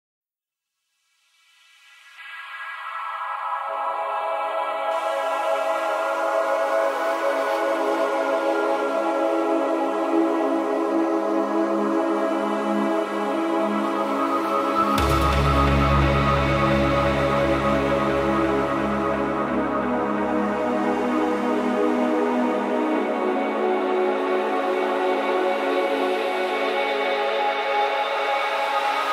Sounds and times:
Electronica: 1.8s - 29.1s.

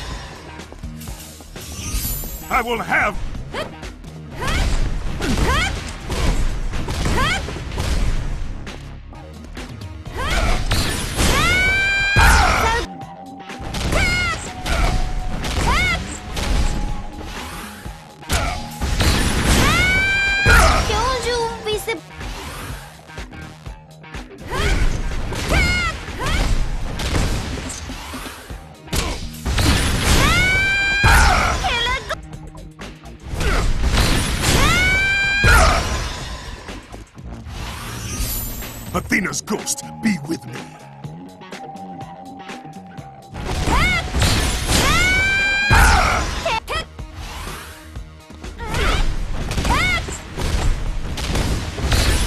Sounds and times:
Music: 0.0s - 52.2s.

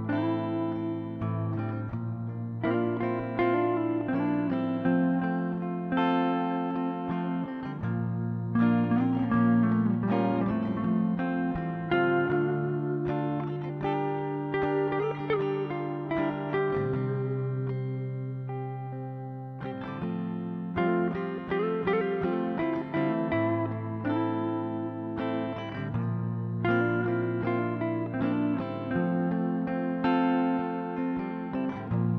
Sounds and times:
Strum: 0.0s - 32.1s.

